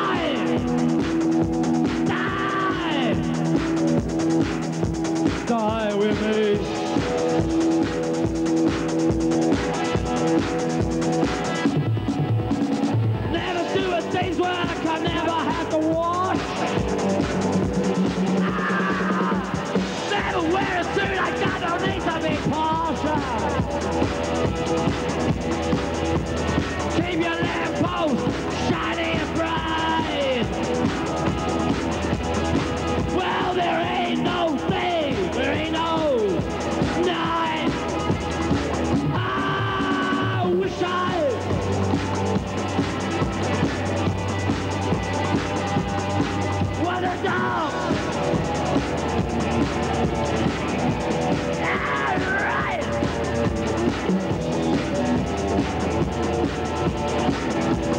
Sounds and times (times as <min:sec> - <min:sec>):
Music: 0:00.0 - 0:57.9.